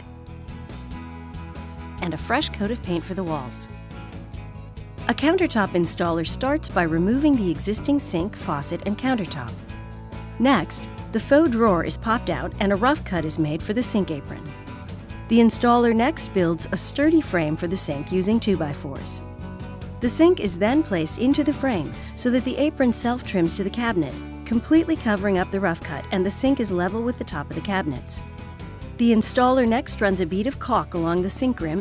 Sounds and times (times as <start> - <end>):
Music: 0.0 - 31.8
Speech: 2.0 - 3.7, 5.1 - 9.6, 10.4 - 14.5, 15.3 - 19.2, 20.0 - 28.2, 29.0 - 31.8.